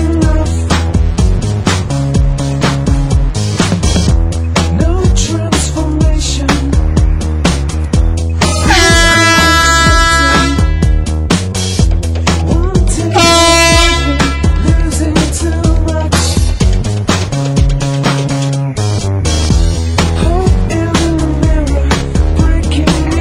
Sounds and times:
Music: 0:00.0 - 0:23.2
Air horn, truck horn: 0:08.5 - 0:11.0, 0:13.1 - 0:14.8.

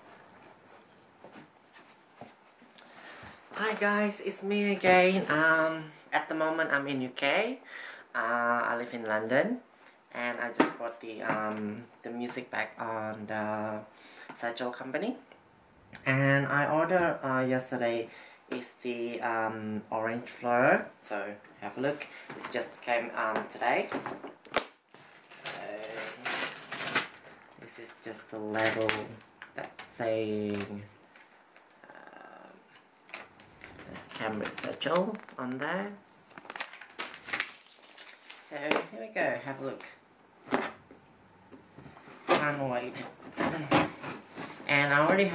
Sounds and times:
Speech: 0:03.6 - 0:07.6, 0:08.2 - 0:15.2, 0:16.0 - 0:24.0, 0:25.5 - 0:26.3, 0:27.6 - 0:30.9, 0:33.9 - 0:36.0, 0:38.4 - 0:40.0, 0:42.3 - 0:43.9, 0:44.7 - 0:45.3.

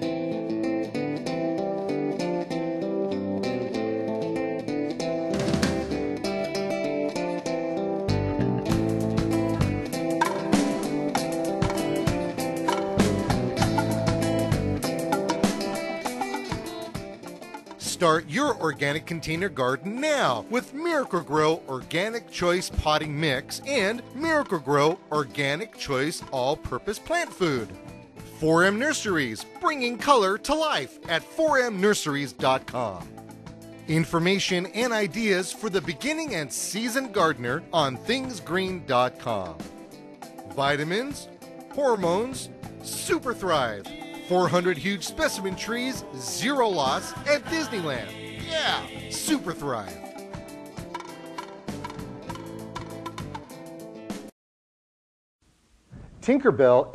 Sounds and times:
Music: 0:00.0 - 0:54.4
Speech: 0:17.8 - 0:27.8, 0:28.4 - 0:33.1, 0:33.9 - 0:39.6, 0:40.6 - 0:50.0, 0:56.2 - 0:56.9.

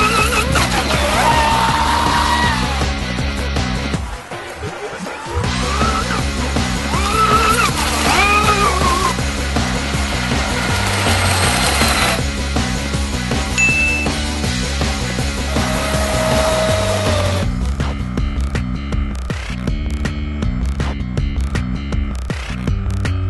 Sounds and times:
Motorboat, speedboat: 0:06.4 - 0:13.0.

